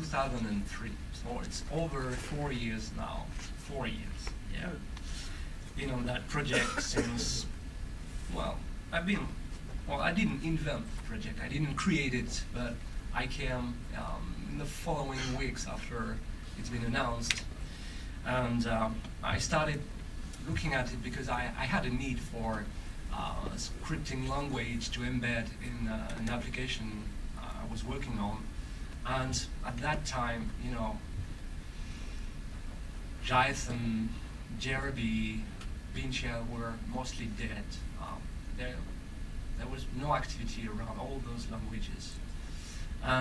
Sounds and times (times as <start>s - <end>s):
Male speech, man speaking: 0.0s - 4.9s, 5.8s - 7.5s, 8.3s - 17.5s, 18.2s - 31.0s, 33.2s - 38.9s, 39.6s - 42.2s
Narration, monologue: 0.0s - 43.2s.